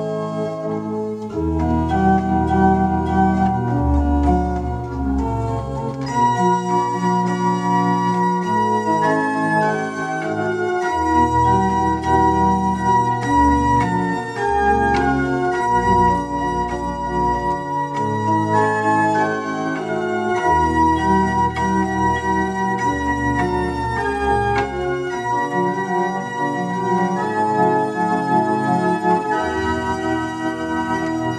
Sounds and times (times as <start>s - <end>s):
Electronic organ: 0.0s - 31.3s.